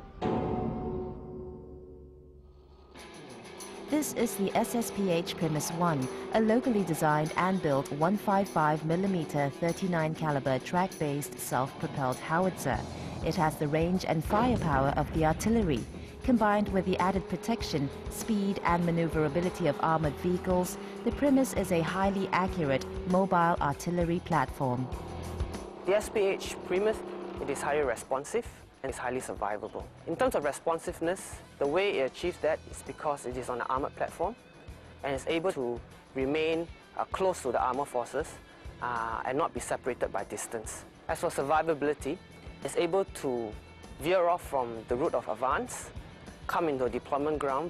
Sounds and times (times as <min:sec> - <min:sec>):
Music: 0:00.0 - 0:47.6
Vehicle: 0:03.0 - 0:47.6
Speech: 0:03.9 - 0:24.9, 0:25.9 - 0:34.4, 0:35.0 - 0:45.9, 0:46.5 - 0:47.6.